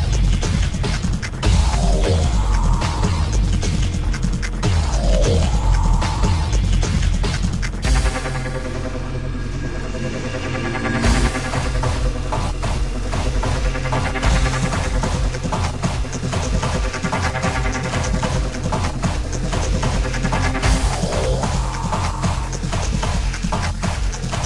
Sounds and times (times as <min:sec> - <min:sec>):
Soundtrack music: 0:00.0 - 0:24.4.